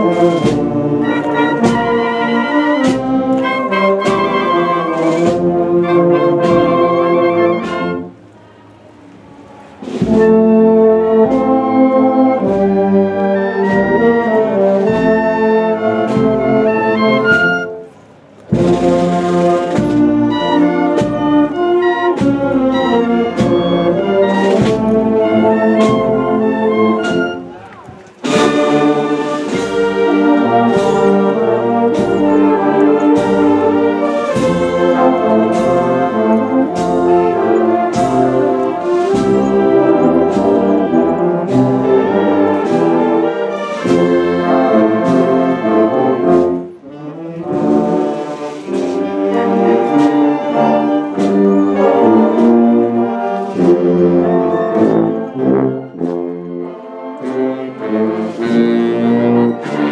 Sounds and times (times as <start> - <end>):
Trombone: 0.0 - 8.1, 9.8 - 59.9
Trumpet: 0.0 - 8.2, 9.8 - 59.9.